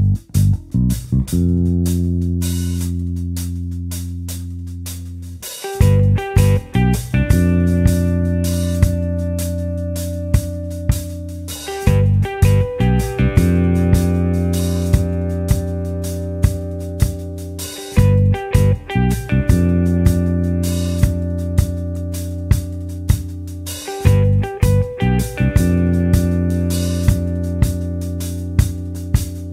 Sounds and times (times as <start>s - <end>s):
Music: 0.0s - 29.5s.